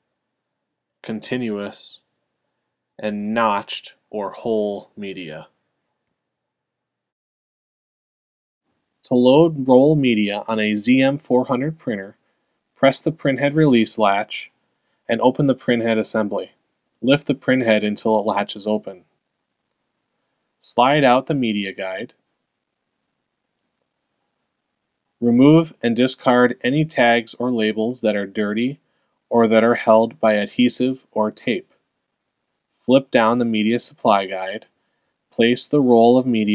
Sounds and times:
Speech: 1.0s - 2.1s, 3.0s - 5.6s, 9.0s - 12.2s, 12.8s - 19.1s, 20.6s - 22.2s, 25.2s - 31.8s, 32.8s - 34.8s, 35.4s - 36.5s.

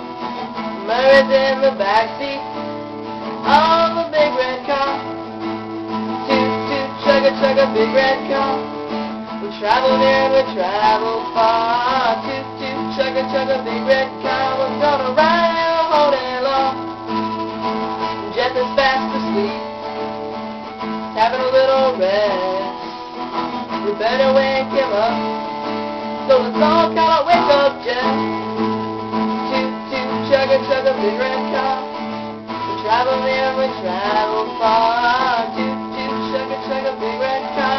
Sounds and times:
Music: 0.0s - 37.7s.

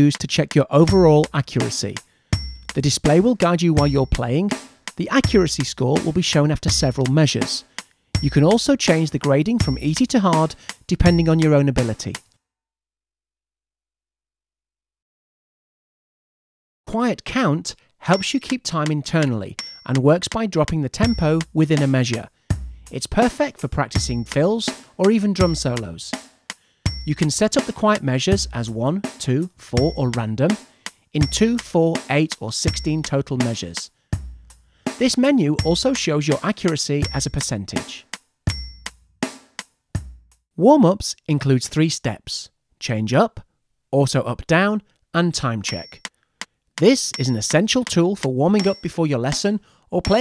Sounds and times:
Speech: 0.0s - 2.0s, 2.8s - 7.6s, 8.2s - 12.2s, 16.9s - 22.3s, 22.9s - 26.2s, 27.1s - 30.6s, 31.2s - 33.9s, 35.0s - 38.1s, 40.6s - 46.0s, 46.8s - 50.2s
Music: 0.0s - 12.4s, 18.0s - 40.5s, 46.8s - 50.2s.

